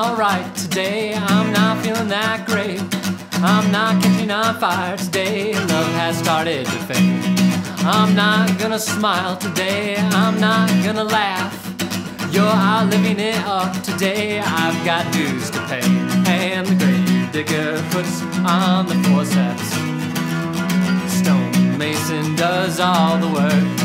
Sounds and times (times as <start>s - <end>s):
Music: 0.0s - 23.8s.